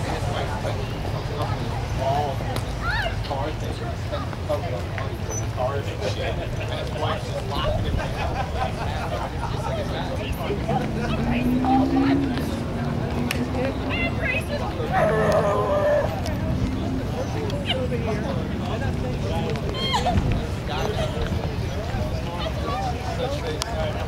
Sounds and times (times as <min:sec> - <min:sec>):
Speech: 0:00.0 - 0:24.0
Car passing by: 0:10.3 - 0:19.3.